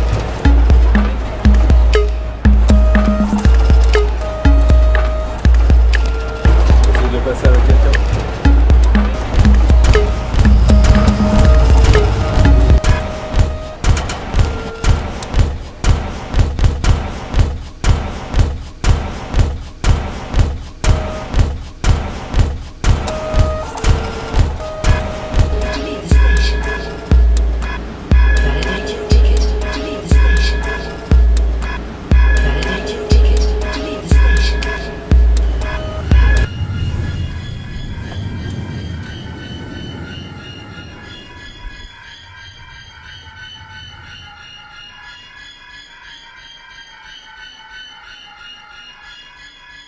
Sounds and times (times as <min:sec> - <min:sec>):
Music: 0:00.0 - 0:49.8
Speech: 0:06.9 - 0:08.0.